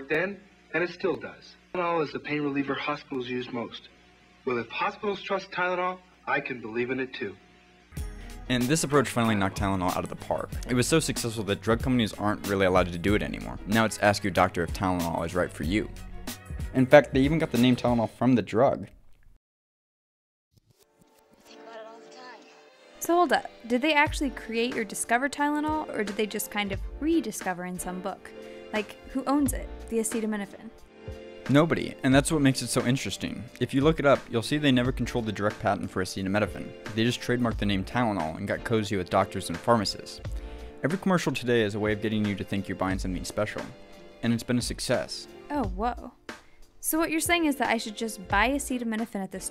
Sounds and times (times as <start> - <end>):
Speech: 0.0 - 3.9, 4.5 - 7.4, 8.5 - 15.9, 16.7 - 18.9, 23.0 - 28.2, 28.8 - 30.7, 31.5 - 40.2, 40.8 - 46.2, 46.8 - 49.5.